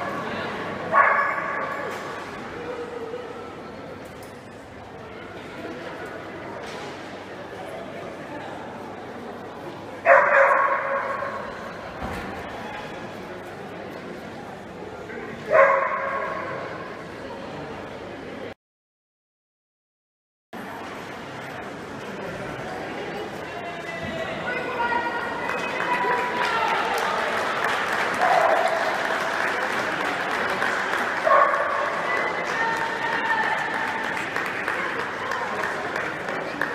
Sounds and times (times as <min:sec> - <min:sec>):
Bow-wow: 0:10.1 - 0:11.3.